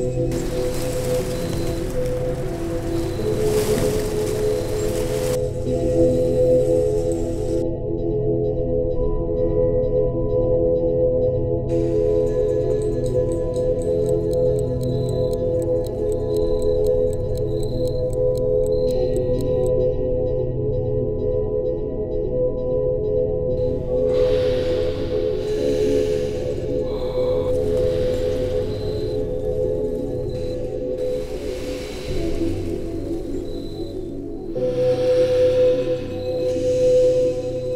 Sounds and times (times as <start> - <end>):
Music: 0.0 - 37.7.